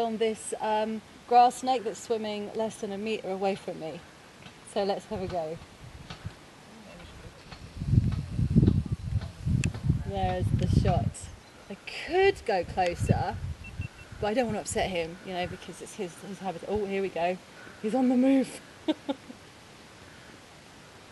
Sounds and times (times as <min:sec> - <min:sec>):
Speech: 0:00.0 - 0:04.0, 0:04.7 - 0:05.6, 0:06.7 - 0:07.5, 0:10.0 - 0:13.4, 0:14.2 - 0:18.6.